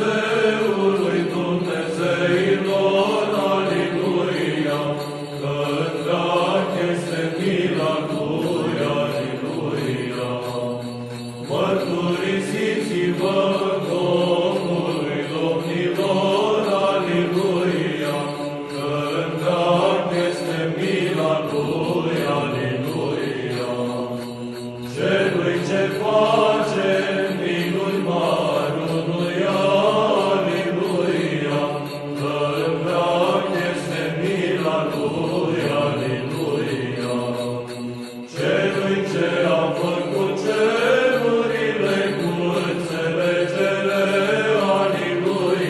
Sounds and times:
Music: 0:00.0 - 0:45.6.

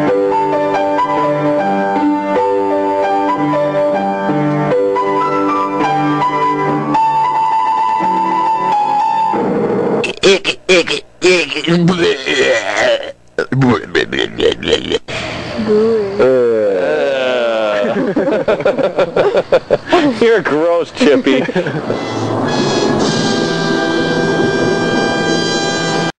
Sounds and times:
Music: 0:00.0 - 0:10.0, 0:21.9 - 0:26.1
Speech: 0:10.1 - 0:15.0, 0:20.0 - 0:21.5.

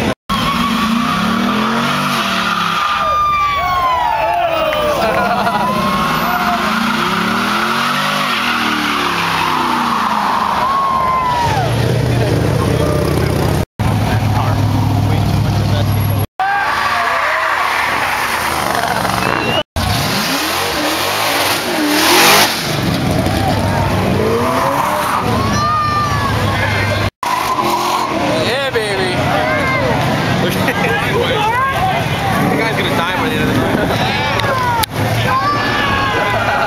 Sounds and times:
Speech: 0:14.0 - 0:16.3, 0:28.3 - 0:36.6.

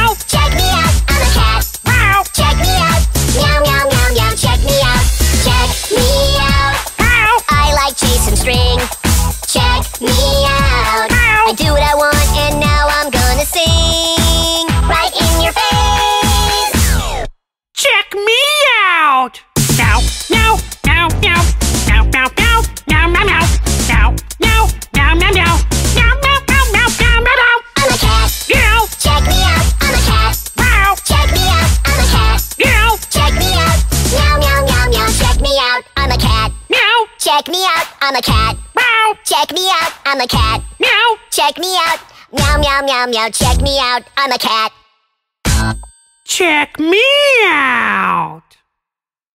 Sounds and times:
Music: 0:00.0 - 0:17.4, 0:19.6 - 0:44.4, 0:45.5 - 0:45.9.

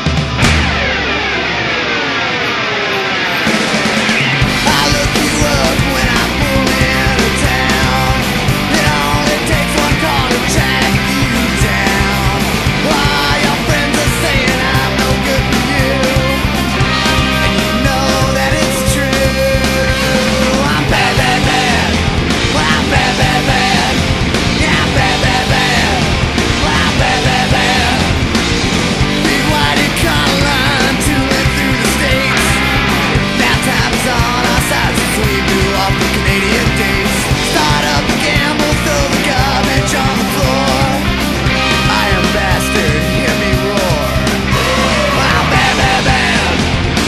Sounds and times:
Music: 0:00.0 - 0:47.0.

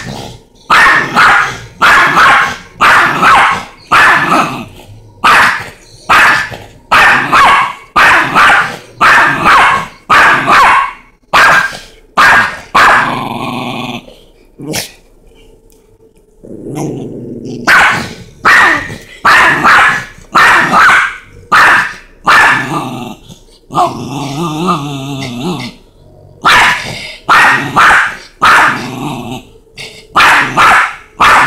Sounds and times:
Growling: 0:00.0 - 0:01.8, 0:04.2 - 0:05.2, 0:13.0 - 0:15.0, 0:16.4 - 0:19.1, 0:22.5 - 0:27.8, 0:28.7 - 0:30.6.

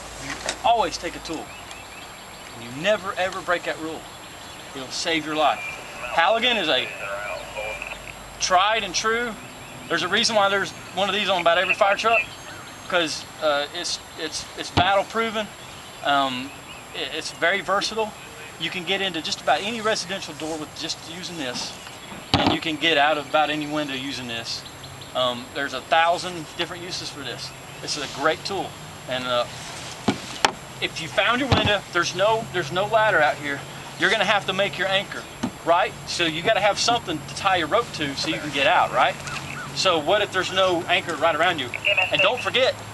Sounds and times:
Speech: 0:00.2 - 0:01.5, 0:02.6 - 0:04.0, 0:04.8 - 0:12.3, 0:12.9 - 0:21.8, 0:22.4 - 0:29.5, 0:30.8 - 0:39.2, 0:39.8 - 0:42.8.

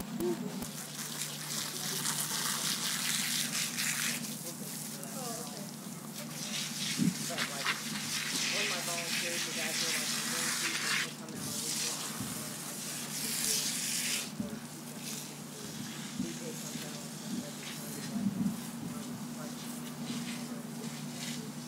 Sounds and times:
Speech: 0:04.2 - 0:21.6.

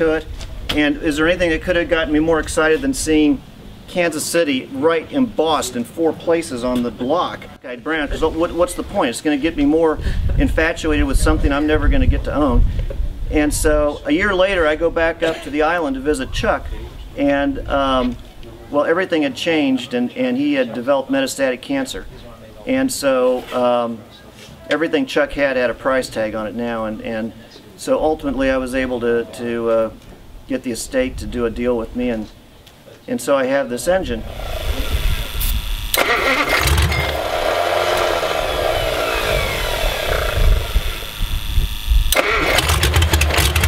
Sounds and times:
Speech: 0:00.0 - 0:12.7, 0:13.3 - 0:34.2.

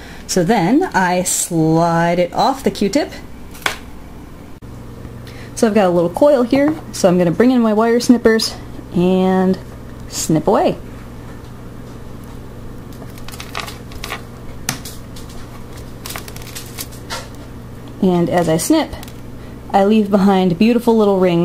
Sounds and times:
Speech: 0:00.3 - 0:03.2, 0:05.6 - 0:10.8, 0:18.0 - 0:19.1, 0:19.7 - 0:21.4.

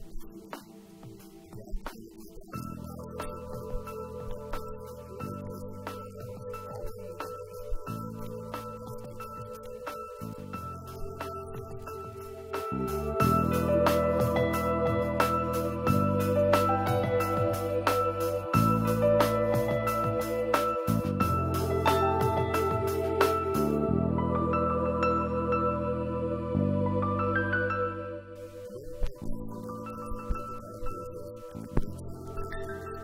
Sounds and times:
Music: 0:00.0 - 0:33.0.

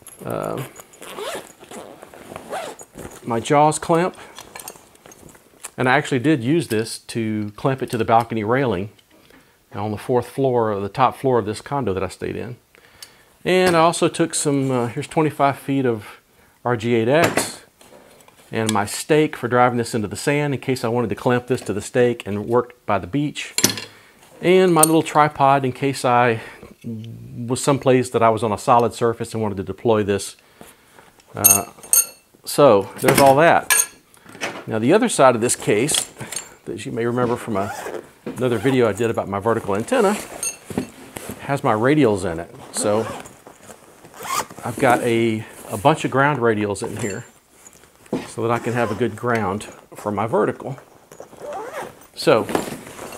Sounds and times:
Speech: 0:00.2 - 0:00.7, 0:03.3 - 0:04.2, 0:05.7 - 0:09.0, 0:09.7 - 0:12.6, 0:13.4 - 0:17.7, 0:18.5 - 0:23.6, 0:24.4 - 0:30.4, 0:31.3 - 0:31.8, 0:32.5 - 0:33.7, 0:34.7 - 0:36.1, 0:36.7 - 0:40.3, 0:41.4 - 0:43.2, 0:44.6 - 0:47.3, 0:48.2 - 0:50.8, 0:52.2 - 0:52.6.

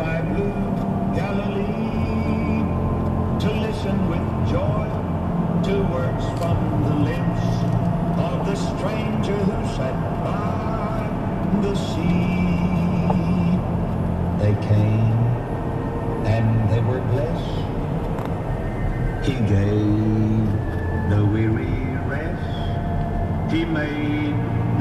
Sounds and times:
Speech: 0:03.4 - 0:05.0, 0:05.6 - 0:07.6, 0:08.2 - 0:12.8, 0:14.4 - 0:15.3, 0:16.3 - 0:17.7, 0:19.2 - 0:22.8, 0:23.5 - 0:24.4.

